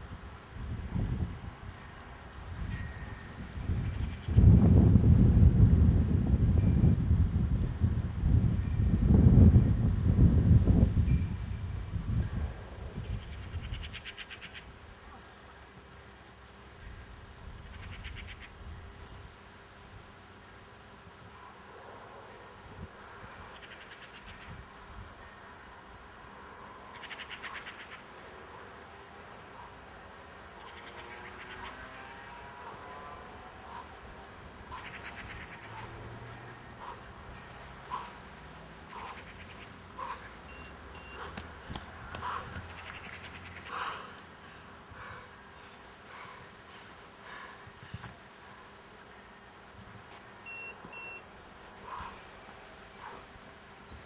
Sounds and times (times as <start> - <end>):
Outside, rural or natural: 0.0 - 54.0.